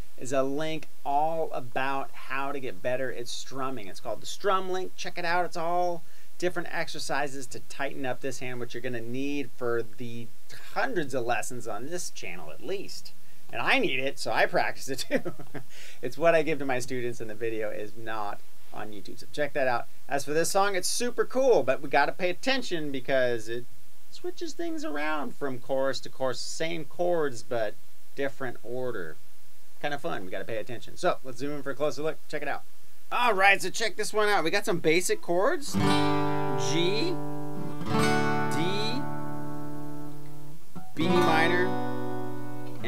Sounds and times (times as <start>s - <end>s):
Speech: 0.2s - 15.3s, 16.0s - 29.2s, 29.8s - 35.8s, 36.6s - 37.2s, 38.5s - 39.1s, 41.0s - 41.8s.